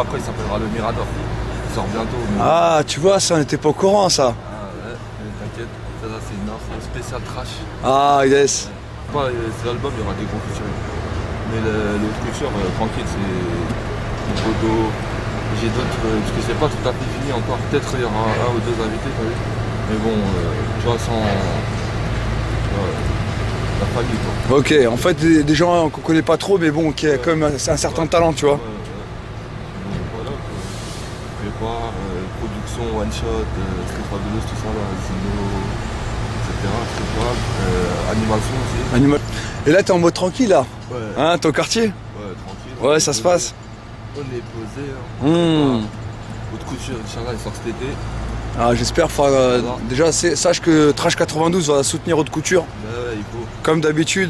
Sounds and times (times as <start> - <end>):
Speech: 0.0 - 10.8, 11.4 - 21.7, 23.8 - 29.1, 31.4 - 35.8, 36.4 - 48.0, 48.6 - 54.2.